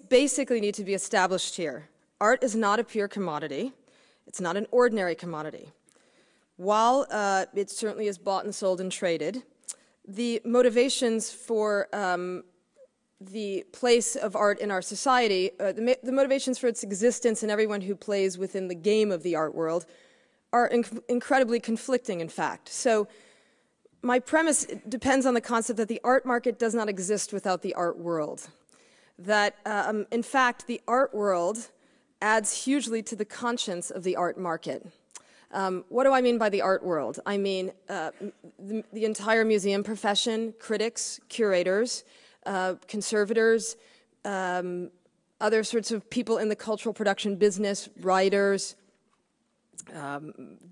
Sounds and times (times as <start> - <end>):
Speech: 0.0 - 5.7, 6.6 - 9.5, 10.1 - 12.5, 13.2 - 19.9, 20.6 - 23.1, 24.0 - 28.5, 29.2 - 34.9, 35.5 - 48.8, 49.8 - 50.7.